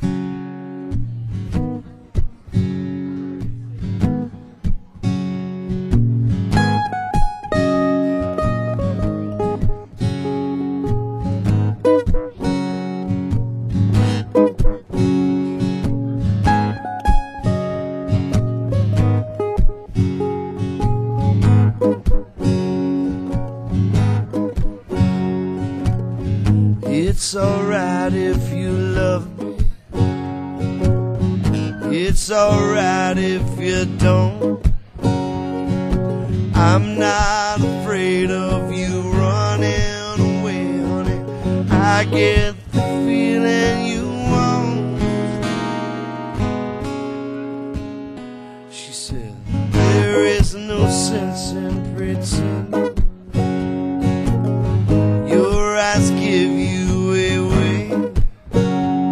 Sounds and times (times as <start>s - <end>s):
Acoustic guitar: 0.0s - 59.1s
Strum: 0.0s - 59.1s.